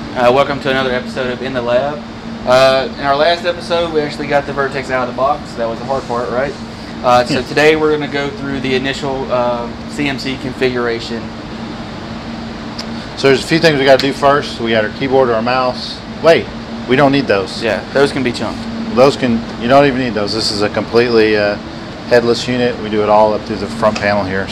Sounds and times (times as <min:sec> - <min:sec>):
Speech: 0:00.2 - 0:11.3, 0:13.2 - 0:24.5.